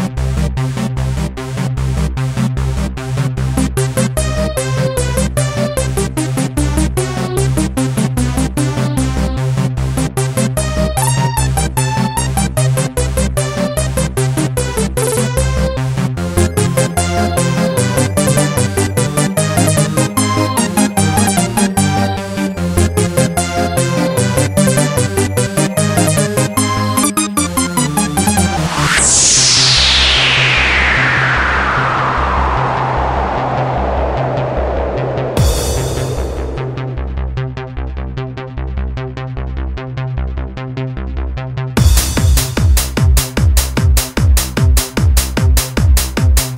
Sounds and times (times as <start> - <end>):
Electronic music: 0.0 - 38.0, 41.8 - 46.5.